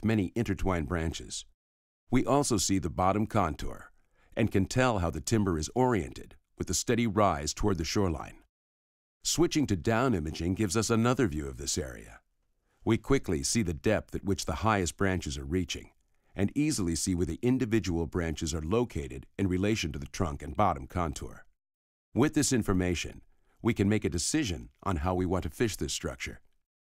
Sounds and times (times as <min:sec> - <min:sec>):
Narration, monologue: 0:00.0 - 0:08.5, 0:09.2 - 0:26.7.